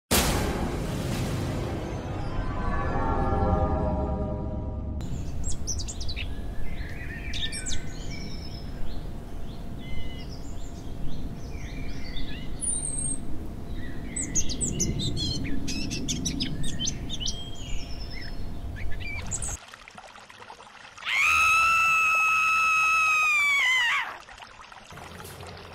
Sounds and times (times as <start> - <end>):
Outside, rural or natural: 0.1 - 25.7
Music: 0.2 - 5.0
Bird vocalization, bird call, bird song: 5.0 - 19.6.